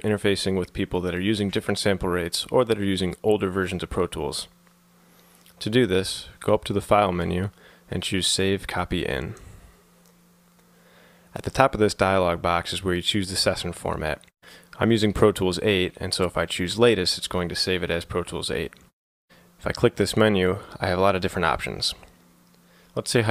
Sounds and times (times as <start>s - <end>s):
Speech: 0.0s - 4.6s, 5.6s - 9.5s, 11.4s - 18.8s, 19.6s - 22.2s, 23.0s - 23.3s.